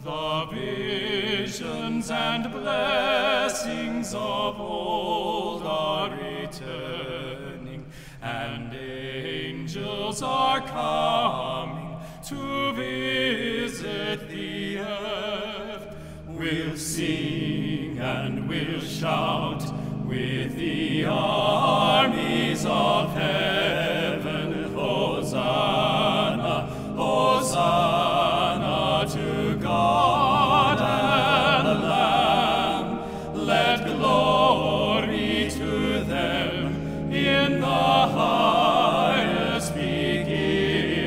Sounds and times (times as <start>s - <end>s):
Choir: 0.0s - 41.0s.